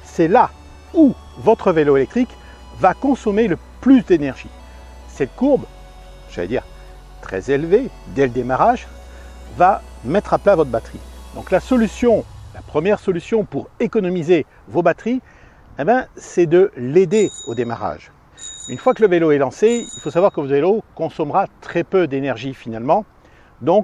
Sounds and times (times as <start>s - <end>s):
Music: 0.0s - 13.6s, 17.2s - 17.8s, 18.4s - 20.4s
Speech: 0.1s - 4.5s, 5.1s - 5.7s, 6.3s - 6.6s, 7.2s - 8.9s, 9.5s - 15.2s, 15.8s - 18.1s, 18.7s - 23.8s.